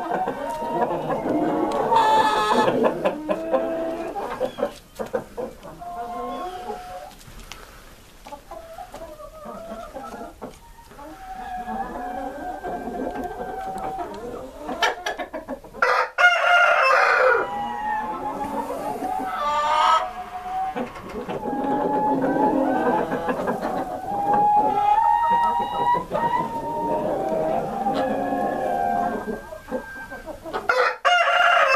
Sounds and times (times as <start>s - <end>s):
Cluck: 0.0s - 7.3s, 8.2s - 16.0s, 17.4s - 30.8s.